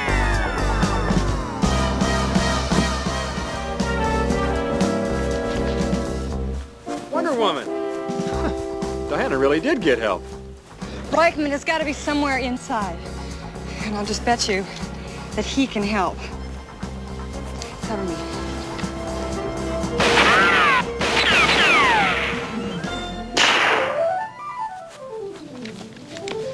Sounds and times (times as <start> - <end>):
Music: 0.0 - 26.5
Outside, urban or manmade: 0.0 - 26.5.